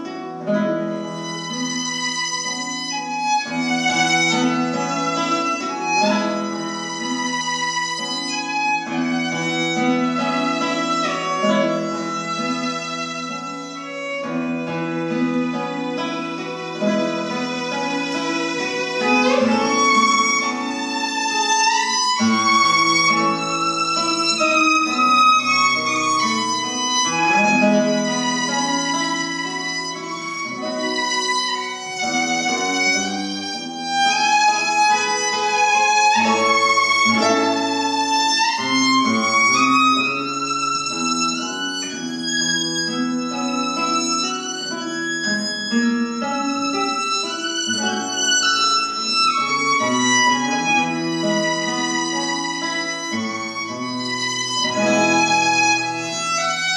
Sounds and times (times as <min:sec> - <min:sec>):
Guitar: 0:00.0 - 0:56.7.